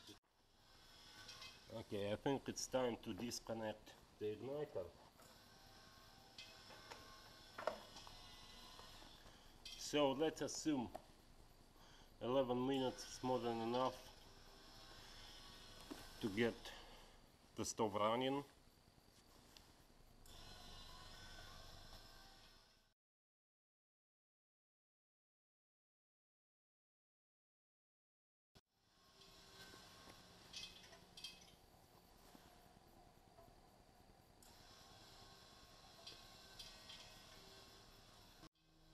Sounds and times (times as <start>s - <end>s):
Speech: 1.7s - 5.0s, 9.8s - 11.0s, 12.2s - 14.1s, 16.2s - 16.8s, 17.6s - 18.6s.